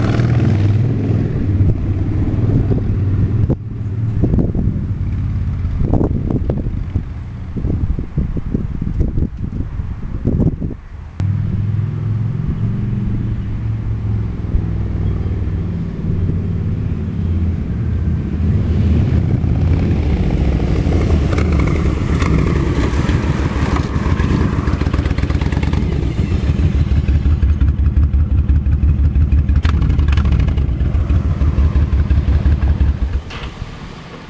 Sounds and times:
Outside, urban or manmade: 0.0 - 34.3.

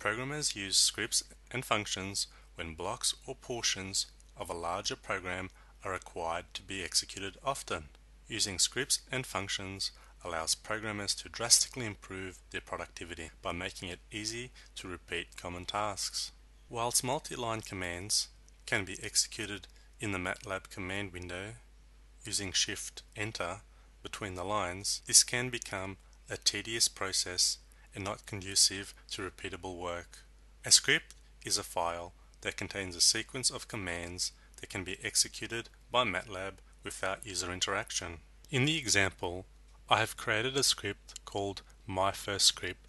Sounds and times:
Speech: 0.0 - 42.8.

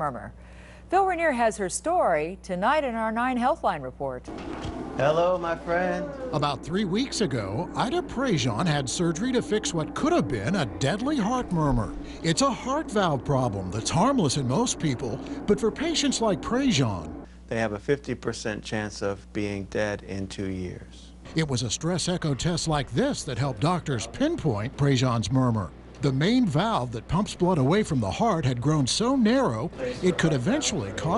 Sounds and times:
Speech: 5.0 - 31.1.

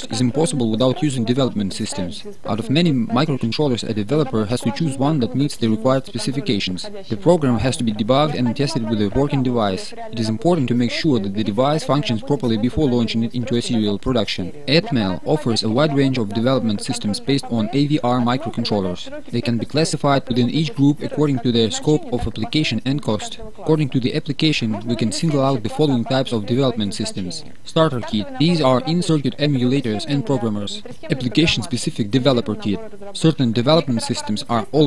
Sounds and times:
Speech: 0.0 - 34.8.

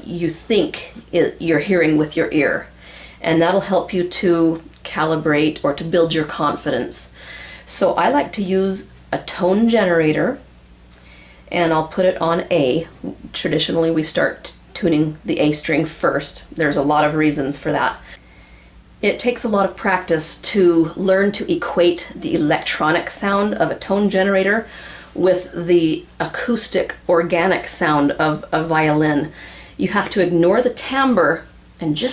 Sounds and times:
Speech: 0.0 - 10.5, 11.5 - 18.2, 19.0 - 32.1.

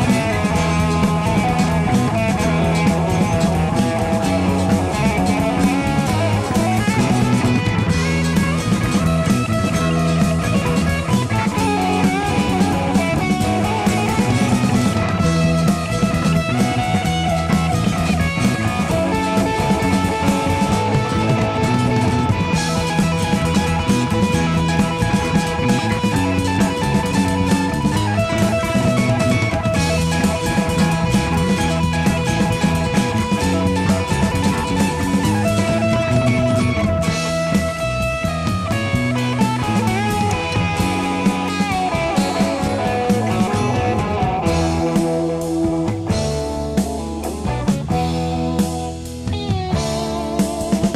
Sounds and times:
Music: 0.0 - 50.9.

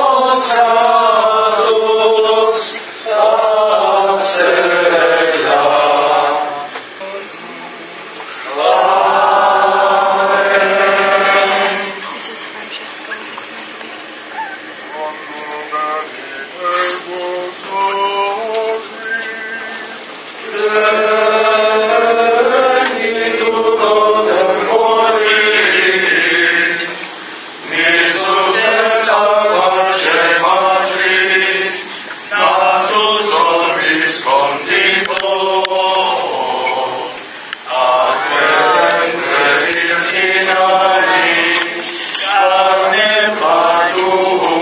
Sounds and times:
Chant: 0.0 - 12.1, 14.2 - 44.6.

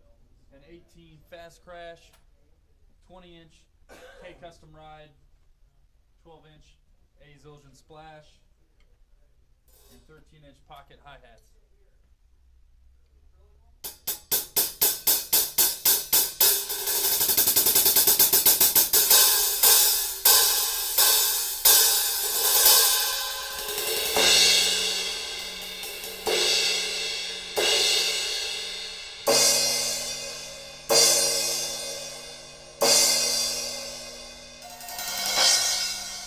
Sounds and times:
Hi-hat: 9.7 - 10.2, 13.9 - 36.2.

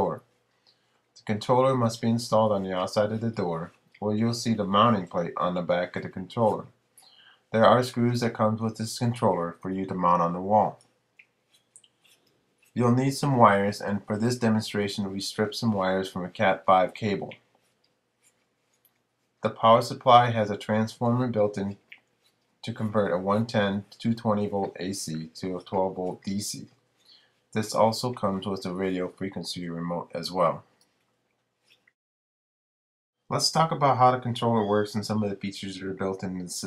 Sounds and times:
Speech: 0.0 - 0.3, 1.2 - 6.8, 7.5 - 10.8, 12.8 - 17.4, 19.4 - 22.0, 22.6 - 26.7, 27.6 - 30.7, 33.3 - 36.6.

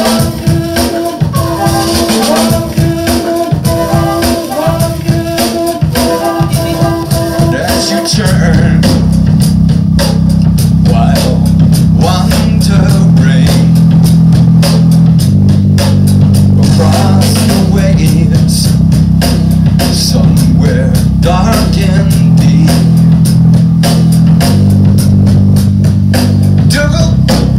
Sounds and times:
Drum: 0.0 - 27.5
Drum kit: 0.0 - 27.5.

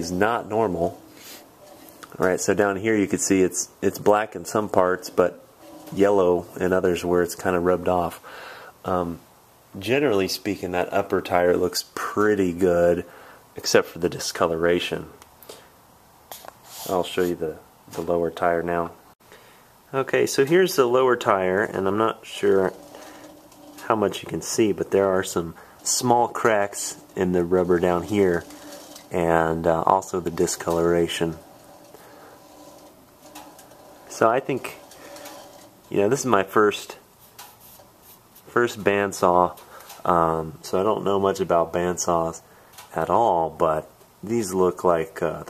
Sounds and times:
Speech: 0.0 - 1.0, 2.1 - 9.2, 9.8 - 15.2, 16.8 - 19.0, 19.9 - 23.2, 23.8 - 31.5, 34.0 - 35.3, 35.9 - 37.1, 38.4 - 45.4.

